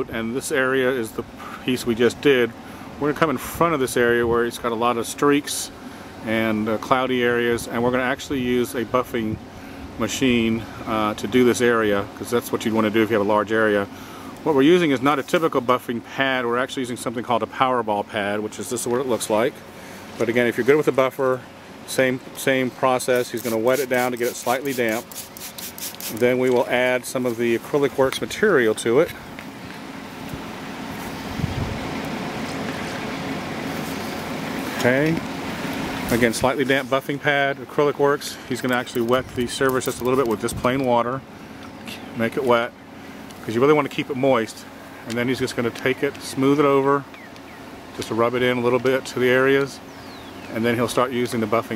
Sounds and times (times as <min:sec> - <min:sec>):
Speech: 0:00.0 - 0:09.4, 0:10.0 - 0:19.6, 0:20.2 - 0:25.0, 0:26.1 - 0:29.2, 0:34.8 - 0:35.2, 0:36.1 - 0:41.2, 0:41.8 - 0:42.8, 0:43.4 - 0:47.1, 0:48.0 - 0:49.8, 0:50.5 - 0:51.7.